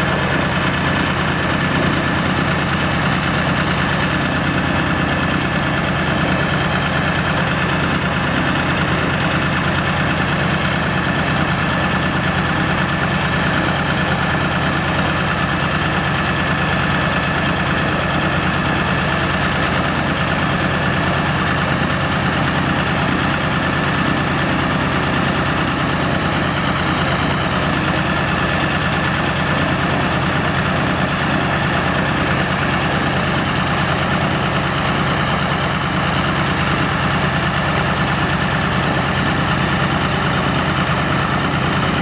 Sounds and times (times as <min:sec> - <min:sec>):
Heavy engine (low frequency): 0:00.0 - 0:42.0
Vehicle: 0:00.0 - 0:42.0.